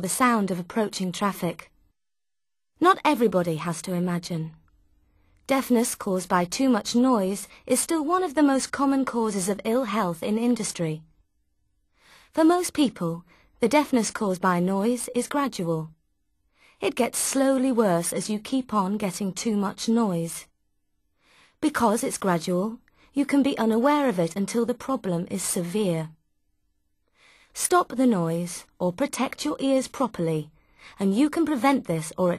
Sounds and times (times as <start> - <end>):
Speech: 0.0 - 1.7, 2.8 - 4.6, 5.5 - 11.0, 12.4 - 16.0, 16.8 - 20.5, 21.6 - 26.2, 27.6 - 32.3.